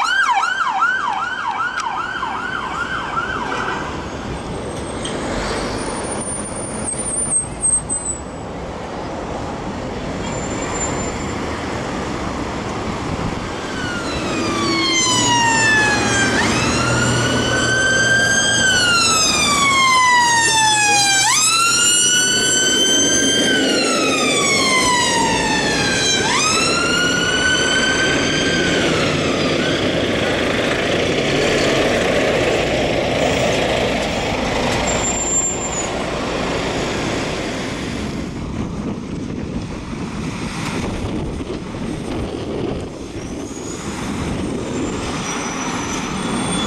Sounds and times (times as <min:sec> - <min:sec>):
Siren: 0:00.0 - 0:04.1, 0:13.6 - 0:30.5
Emergency vehicle: 0:00.0 - 0:08.4, 0:10.2 - 0:46.6.